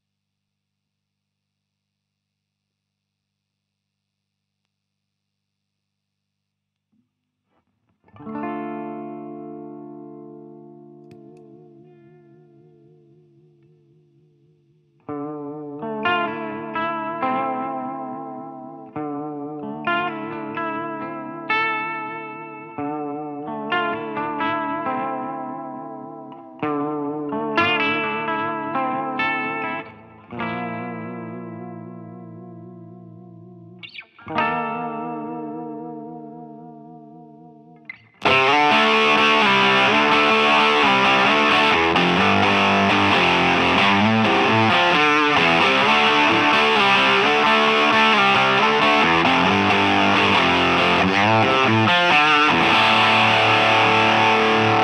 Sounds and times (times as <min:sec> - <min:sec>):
Effects unit: 0:05.8 - 0:54.8
Electric guitar: 0:07.5 - 0:54.8.